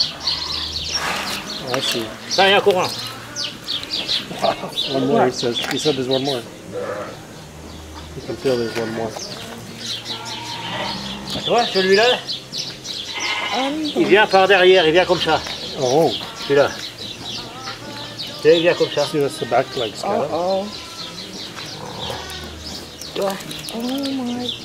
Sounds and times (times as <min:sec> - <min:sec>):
Animal: 0:00.0 - 0:04.7, 0:06.2 - 0:07.3, 0:08.0 - 0:12.3, 0:13.1 - 0:14.1, 0:20.4 - 0:24.6
Music: 0:00.0 - 0:24.6.